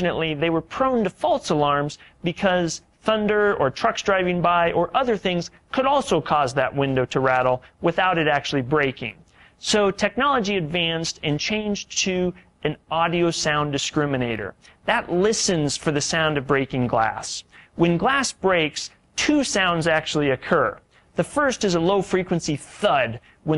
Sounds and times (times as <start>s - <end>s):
Speech: 0.0s - 23.5s.